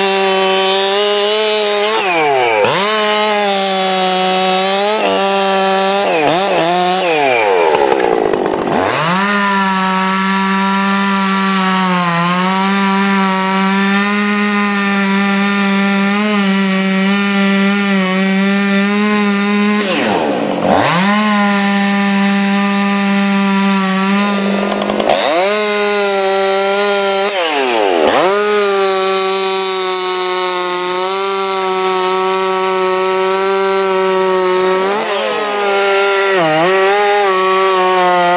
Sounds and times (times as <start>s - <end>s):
Chainsaw: 0.0s - 38.3s.